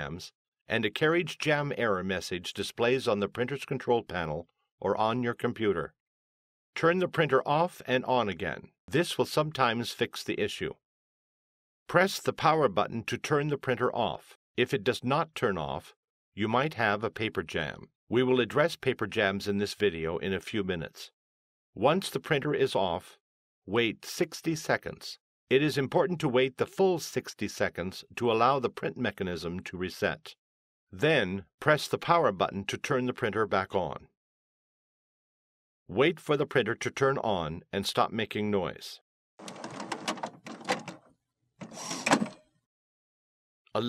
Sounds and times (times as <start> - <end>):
Speech: 0.0 - 6.0, 6.8 - 10.8, 11.9 - 21.2, 21.8 - 30.4, 31.0 - 34.1, 35.9 - 39.0.